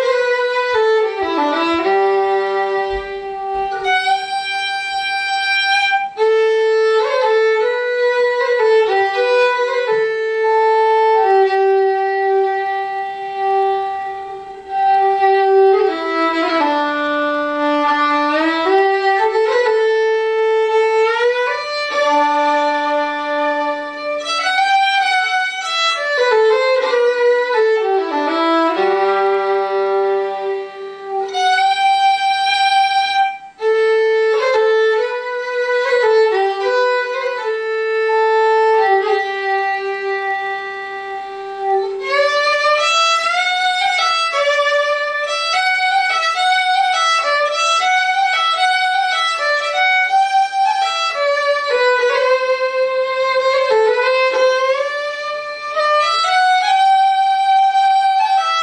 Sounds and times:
Violin, fiddle: 0:00.0 - 0:58.6.

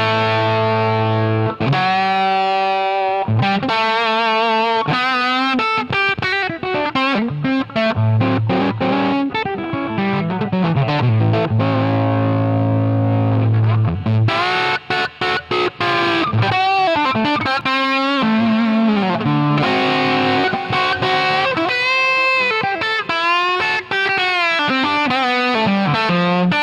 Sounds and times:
Bass guitar: 0:00.0 - 0:26.6.

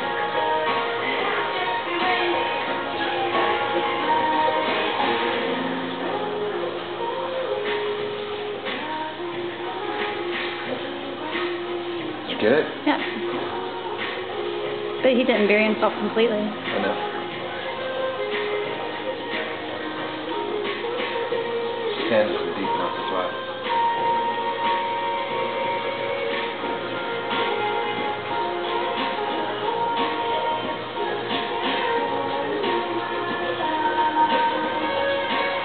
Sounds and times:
Music: 0:00.0 - 0:35.6.

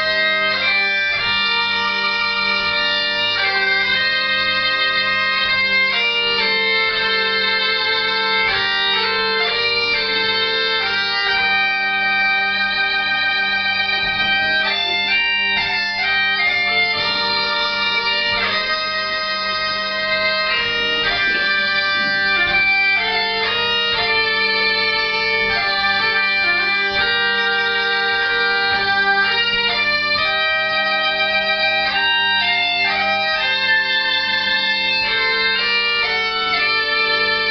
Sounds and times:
Bagpipes: 0:00.0 - 0:37.5.

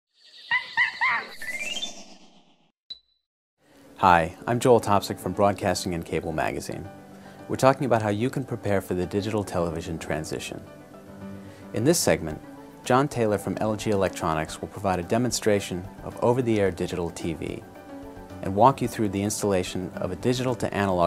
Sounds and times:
Music: 0:03.6 - 0:21.0
Speech: 0:04.0 - 0:06.9, 0:07.5 - 0:10.6, 0:11.8 - 0:17.6, 0:18.4 - 0:21.0.

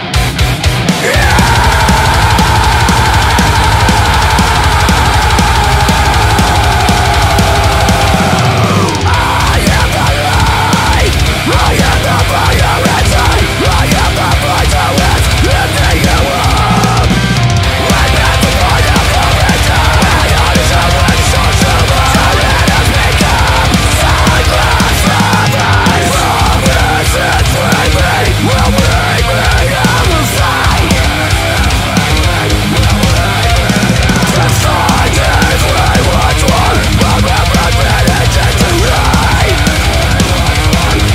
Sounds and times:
Pop music: 0:01.0 - 0:31.2.

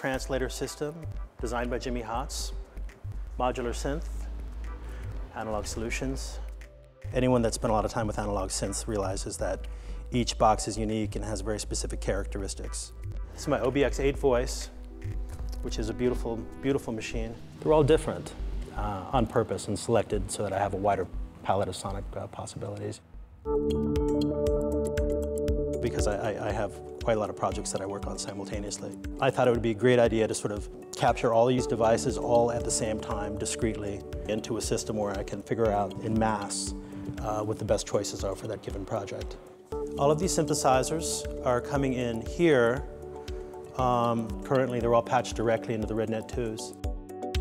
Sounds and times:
Speech: 0:00.0 - 0:02.6, 0:03.4 - 0:04.2, 0:05.4 - 0:06.5, 0:07.1 - 0:14.8, 0:15.6 - 0:23.0, 0:25.8 - 0:39.4, 0:40.0 - 0:42.9, 0:43.8 - 0:46.8
Music: 0:00.0 - 0:22.8, 0:23.4 - 0:47.4.

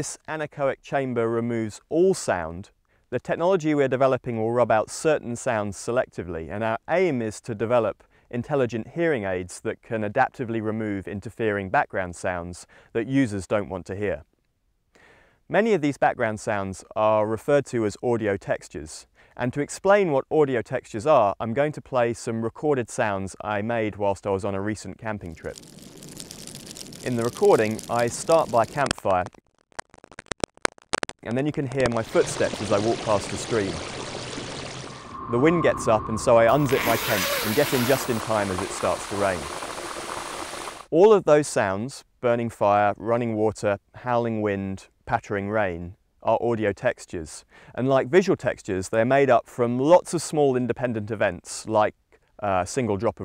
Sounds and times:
Speech: 0:00.0 - 0:14.3, 0:15.5 - 0:25.5, 0:27.0 - 0:29.3, 0:31.2 - 0:33.8, 0:35.3 - 0:39.5, 0:40.9 - 0:53.2.

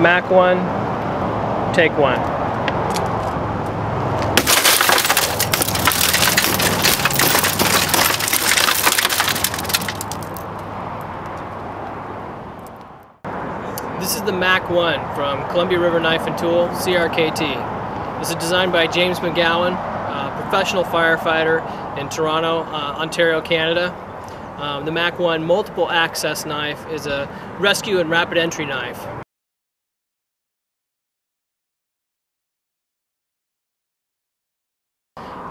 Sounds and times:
Speech: 0:00.0 - 0:00.7, 0:01.7 - 0:02.2, 0:14.0 - 0:17.6, 0:18.2 - 0:24.0, 0:24.6 - 0:29.2.

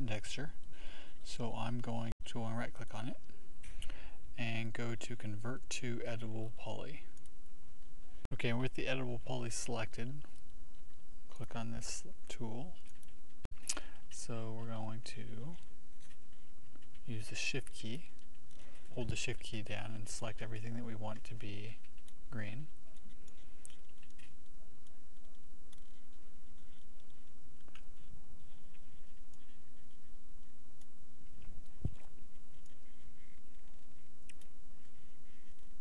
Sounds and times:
Speech: 0:00.0 - 0:00.6, 0:01.2 - 0:03.3, 0:04.3 - 0:07.2, 0:08.3 - 0:10.3, 0:11.3 - 0:12.8, 0:14.1 - 0:15.7, 0:17.0 - 0:18.2, 0:18.9 - 0:22.8.

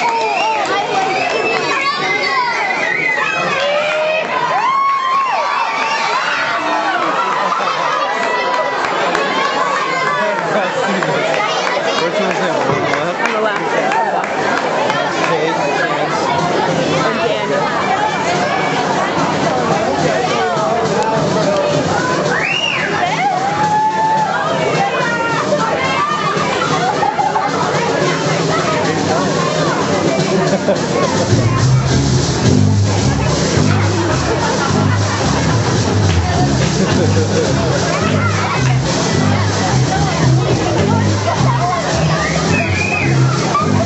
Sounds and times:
Speech: 0:00.0 - 0:43.8
Music: 0:16.4 - 0:43.8.

